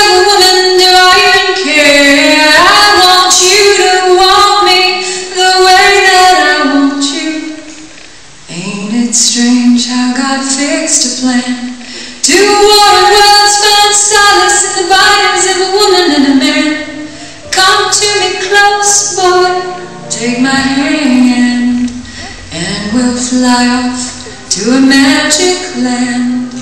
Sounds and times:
Music: 0.0 - 26.6.

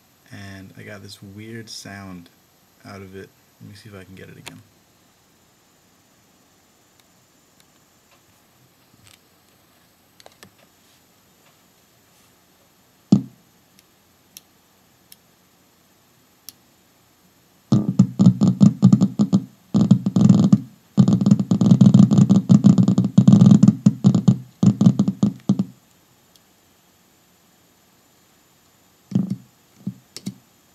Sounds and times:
Speech: 0.2 - 4.7.

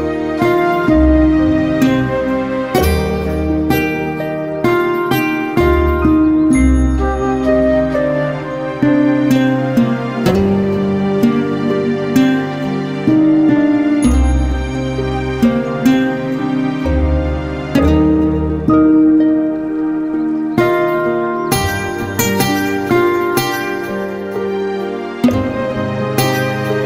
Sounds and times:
Background music: 0.0 - 26.8.

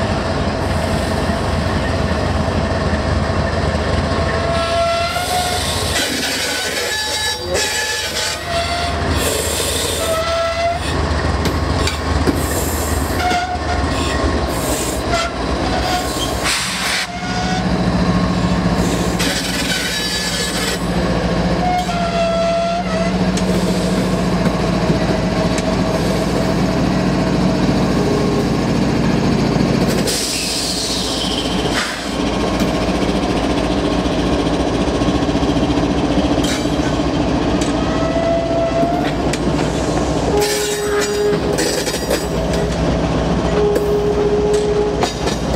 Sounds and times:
Railroad car, train wagon: 0.0 - 45.5
Train horn: 4.5 - 5.7, 6.8 - 9.0, 10.0 - 10.9, 13.2 - 13.8, 15.1 - 16.0, 21.6 - 23.2, 37.8 - 39.2, 40.3 - 41.8, 43.5 - 45.2
Train whistle: 4.5 - 5.8, 6.5 - 10.9, 13.1 - 13.8, 15.1 - 16.1, 21.6 - 23.2, 37.8 - 39.2, 40.3 - 41.8, 43.6 - 45.2.

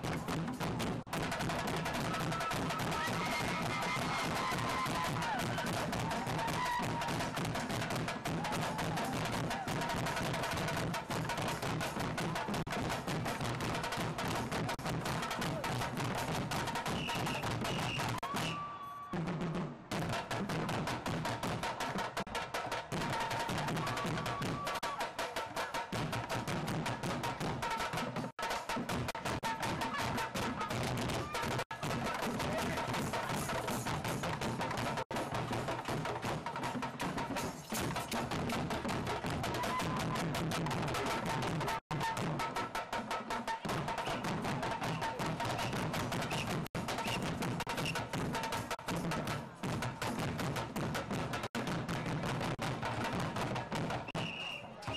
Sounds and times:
Wood block: 21.0 - 54.9.

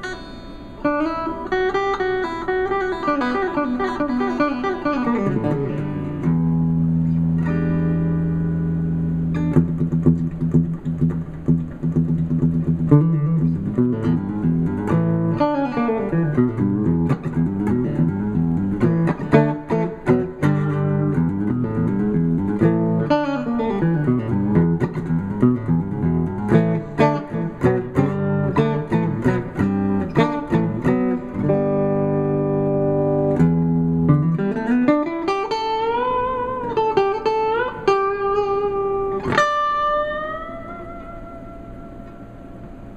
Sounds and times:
Electric guitar: 0.0 - 42.9.

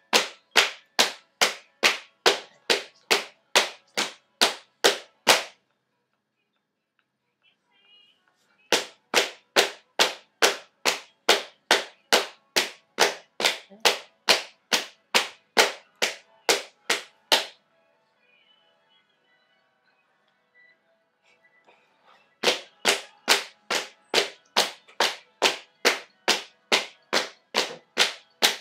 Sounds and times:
Percussion: 0.0 - 5.6, 8.7 - 17.6, 22.4 - 28.6.

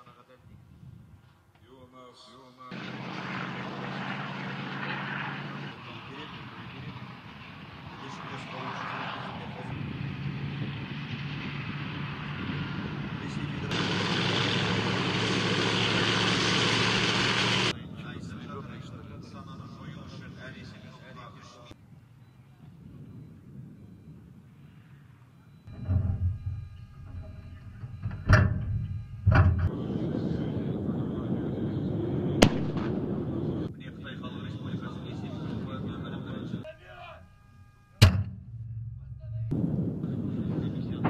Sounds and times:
Gunshot, gunfire: 32.4 - 32.9.

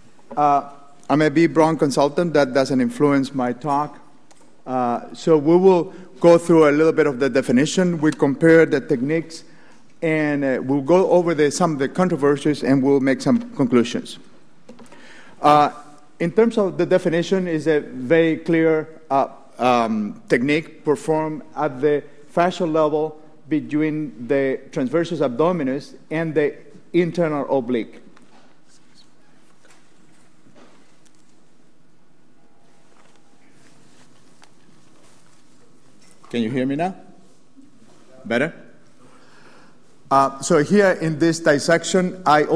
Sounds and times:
Speech: 0.4 - 4.0, 4.7 - 14.2, 15.4 - 28.0, 36.3 - 37.1, 38.1 - 38.7, 40.1 - 42.5.

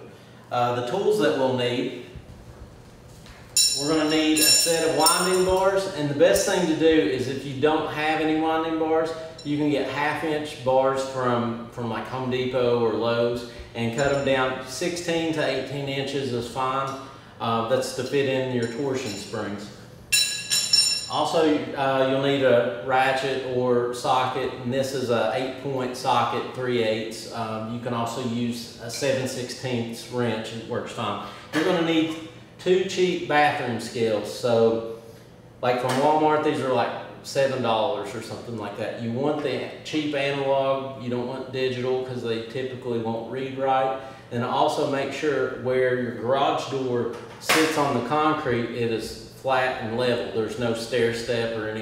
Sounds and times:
Speech: 0.0 - 2.1, 3.8 - 19.8, 21.1 - 35.0, 35.6 - 51.8.

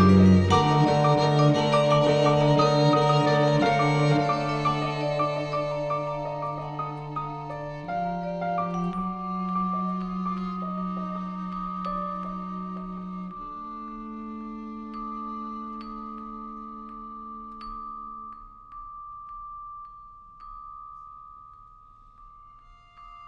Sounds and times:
Violin, fiddle: 0.0 - 16.9
Cello: 0.0 - 18.4
Percussion: 0.0 - 23.2.

